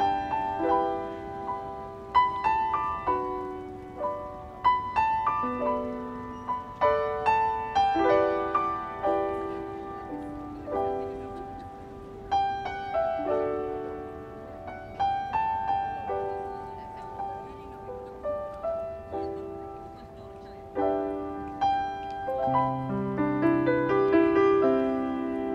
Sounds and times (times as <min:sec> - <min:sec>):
Music: 0:00.0 - 0:25.5
Speech: 0:15.8 - 0:21.2.